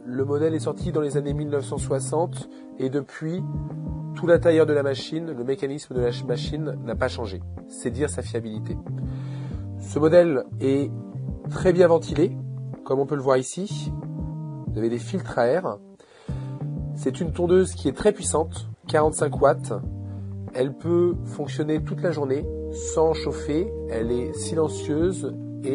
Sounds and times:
Speech: 0.0s - 3.6s, 4.2s - 8.8s, 9.8s - 10.9s, 11.5s - 14.0s, 14.7s - 15.8s, 17.0s - 19.9s, 20.5s - 25.7s
Music: 0.0s - 25.7s.

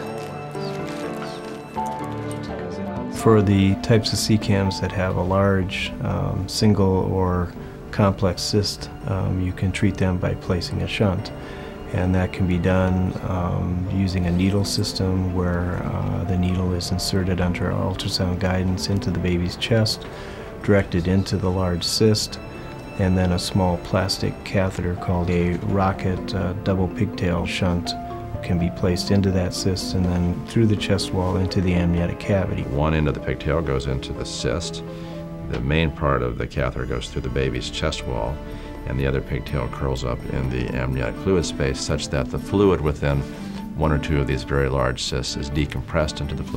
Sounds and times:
Music: 0.0s - 46.5s
Speech: 2.5s - 11.3s, 11.9s - 20.0s, 20.6s - 22.4s, 23.0s - 34.8s, 35.5s - 46.5s.

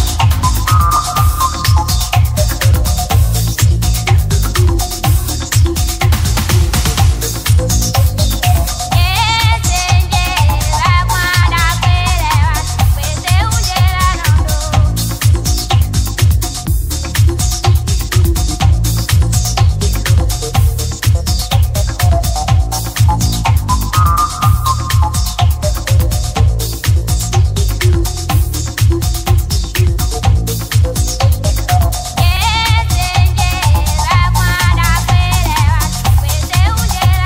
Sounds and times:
Music: 0.0s - 37.2s.

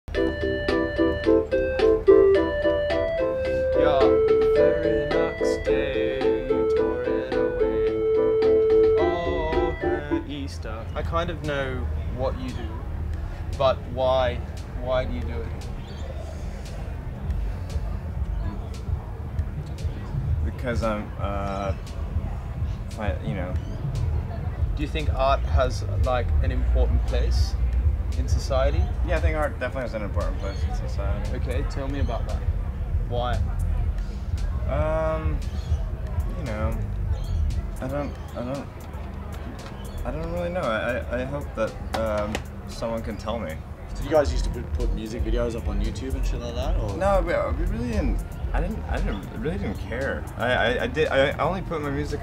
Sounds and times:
Music: 0.1s - 52.2s.

